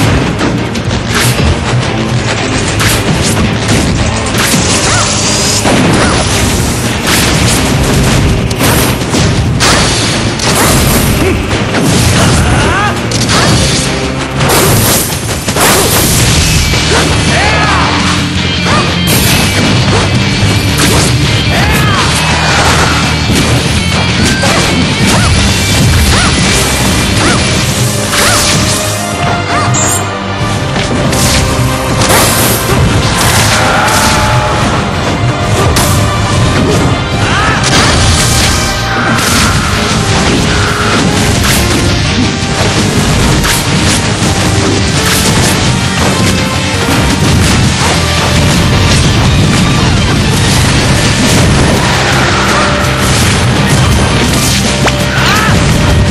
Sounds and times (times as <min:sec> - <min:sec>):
Music: 0:00.0 - 0:56.1
Smash, crash: 0:00.0 - 0:56.1.